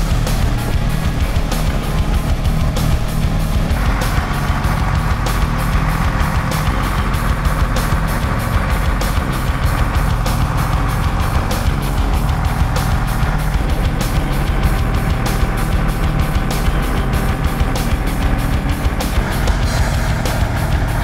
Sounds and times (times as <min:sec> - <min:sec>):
Music: 0:00.0 - 0:21.0.